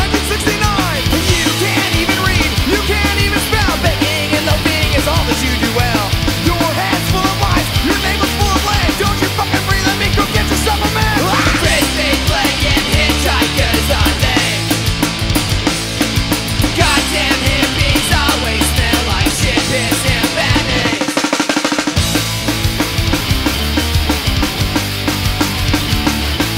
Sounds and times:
Punk rock: 0.0s - 26.5s.

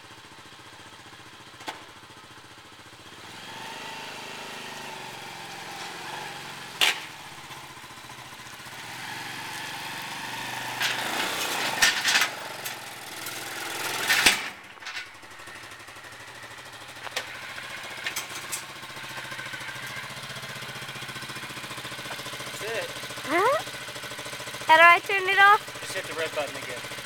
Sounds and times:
Vehicle: 0.0s - 27.0s
Speech: 22.6s - 23.6s, 24.7s - 26.8s.

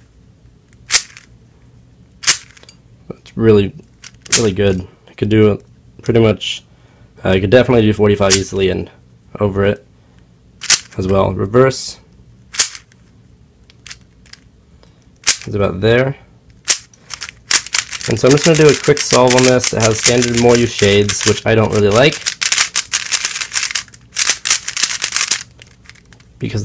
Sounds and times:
Speech: 3.1s - 9.9s, 11.0s - 12.1s, 15.5s - 16.3s, 18.1s - 22.2s, 26.4s - 26.6s.

